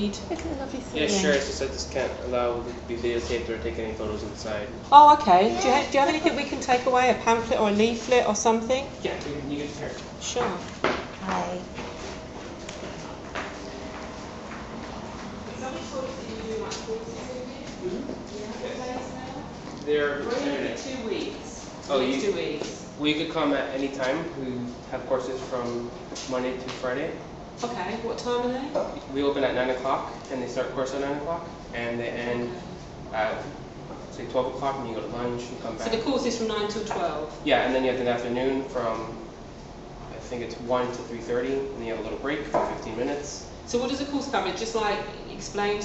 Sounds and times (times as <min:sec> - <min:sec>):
Speech: 0:00.0 - 0:10.6, 0:21.9 - 0:28.0, 0:29.1 - 0:32.6, 0:40.2 - 0:44.1
Inside, large room or hall: 0:08.4 - 0:26.4.